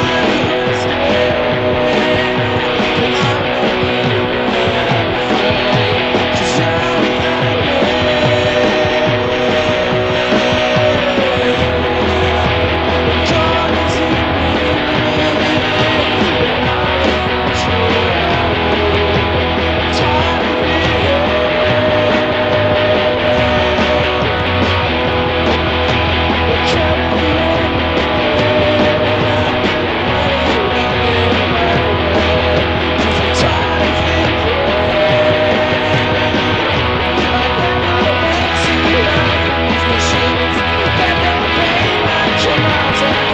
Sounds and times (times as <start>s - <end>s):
Electric guitar: 0.0s - 43.3s.